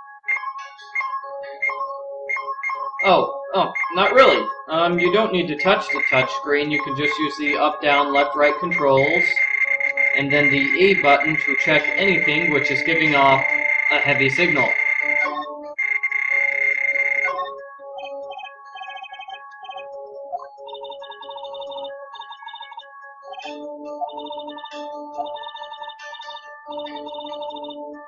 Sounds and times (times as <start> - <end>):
Music: 0.0 - 28.0
Speech: 3.0 - 9.4, 10.2 - 14.8.